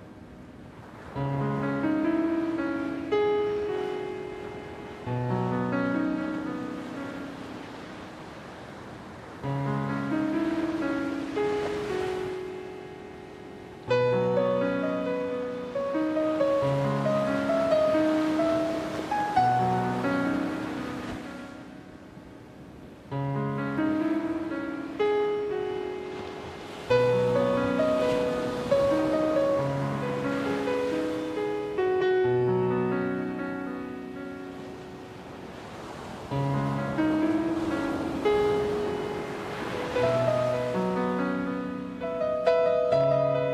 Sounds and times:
Waves, surf: 0.0 - 43.5
Wind: 0.0 - 43.5.

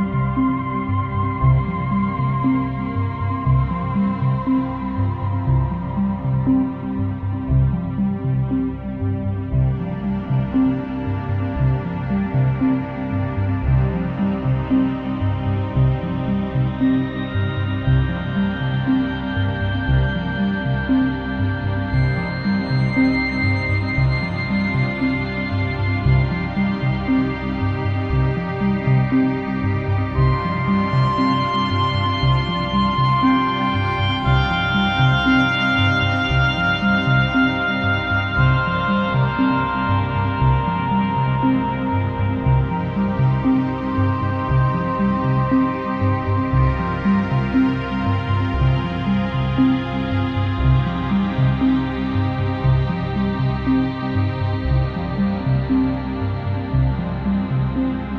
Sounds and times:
Ambient music: 0.0 - 58.1.

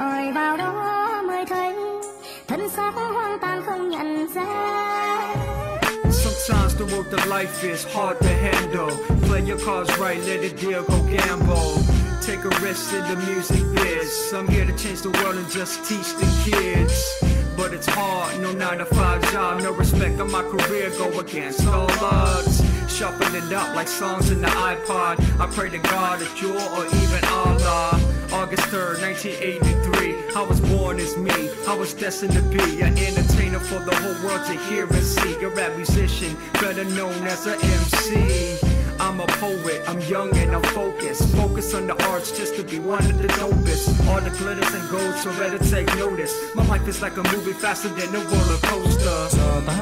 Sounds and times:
Music: 0.0 - 49.8.

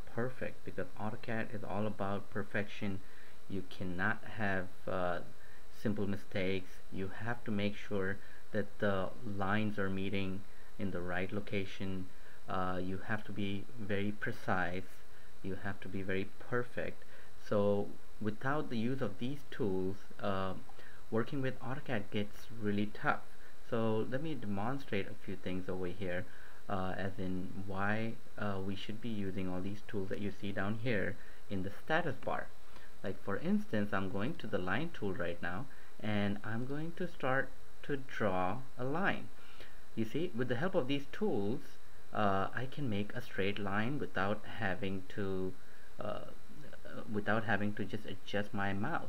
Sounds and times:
Speech: 0.0 - 39.3, 40.0 - 49.0.

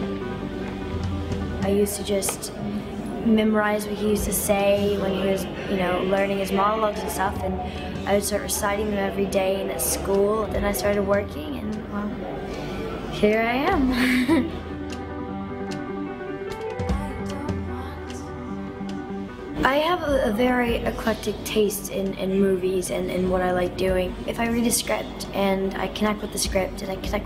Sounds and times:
Music: 0.0 - 27.2
Speech: 1.6 - 2.6, 3.2 - 12.3, 13.2 - 14.5, 19.6 - 27.2.

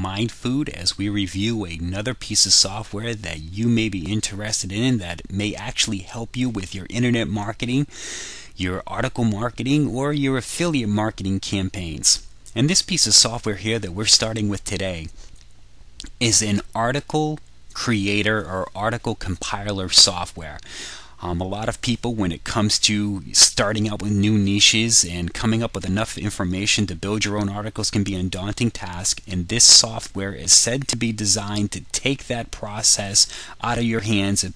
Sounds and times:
Speech: 0.0 - 7.9, 8.6 - 15.2, 16.0 - 20.6, 21.2 - 34.5.

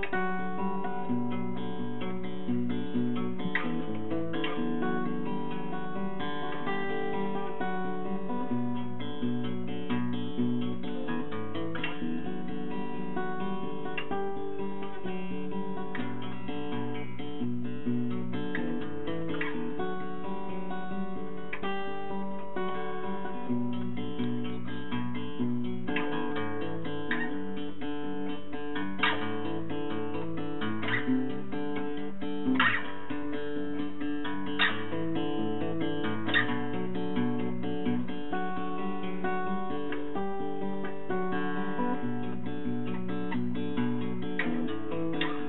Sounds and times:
Acoustic guitar: 0.0 - 45.4
Strum: 0.0 - 45.4.

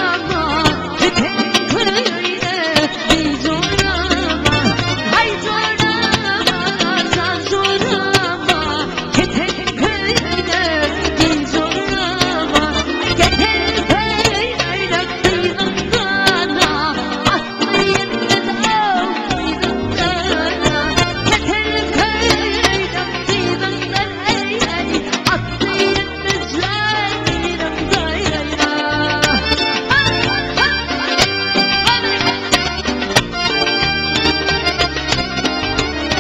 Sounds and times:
Wedding music: 0.0 - 36.2.

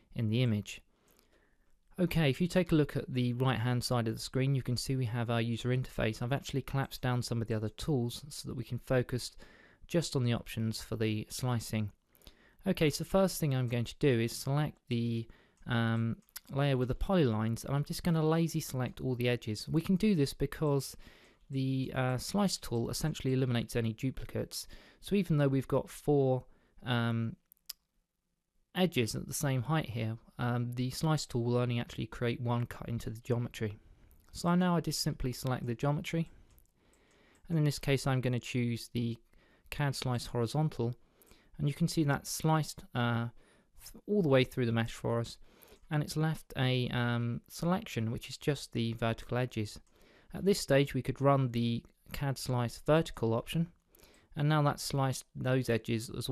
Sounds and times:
Speech: 0.0 - 0.9, 2.0 - 12.0, 12.6 - 27.4, 28.7 - 36.3, 37.5 - 41.0, 41.6 - 53.8, 54.4 - 56.3.

